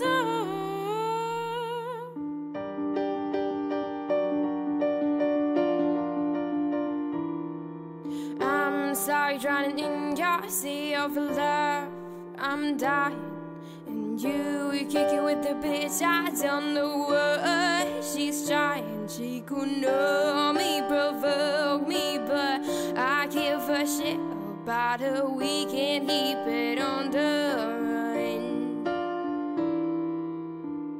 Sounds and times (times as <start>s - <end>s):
Music: 0.0s - 30.9s.